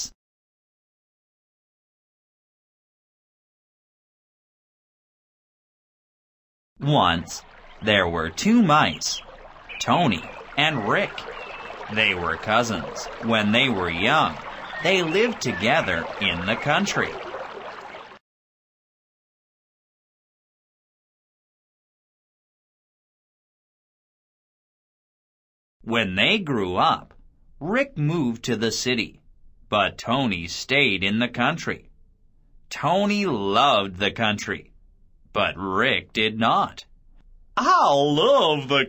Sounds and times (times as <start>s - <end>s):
Speech: 6.8s - 11.3s, 11.9s - 17.2s, 25.8s - 31.9s, 32.7s - 34.7s, 35.3s - 36.9s, 37.6s - 38.8s.